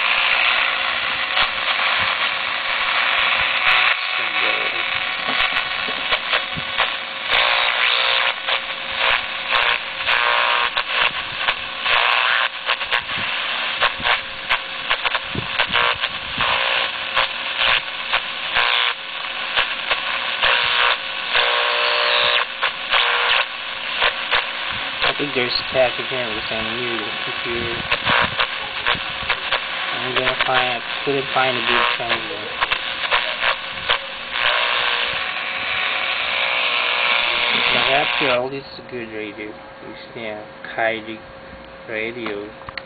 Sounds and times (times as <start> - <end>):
Radio: 0.0 - 41.2, 41.9 - 42.6
Speech: 4.2 - 4.9, 25.0 - 29.0, 29.9 - 32.6, 37.4 - 41.2, 41.9 - 42.6.